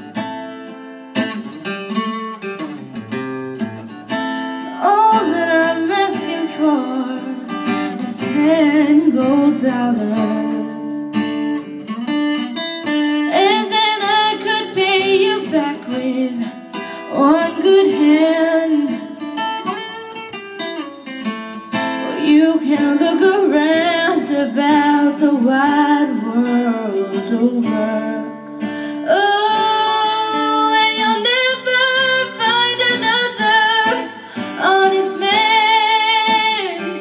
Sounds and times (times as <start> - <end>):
Guitar: 0.0 - 37.0
Female singing: 4.8 - 11.1, 13.3 - 19.2, 22.0 - 28.4, 29.1 - 37.0.